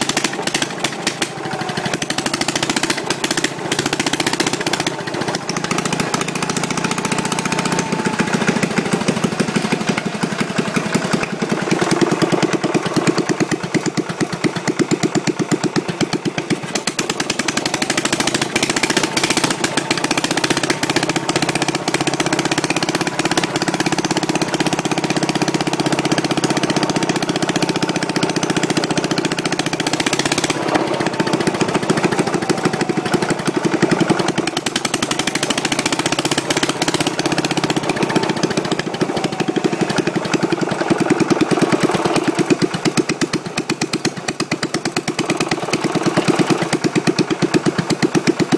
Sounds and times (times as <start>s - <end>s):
Idling: 0.0s - 48.5s
Medium engine (mid frequency): 0.0s - 48.5s.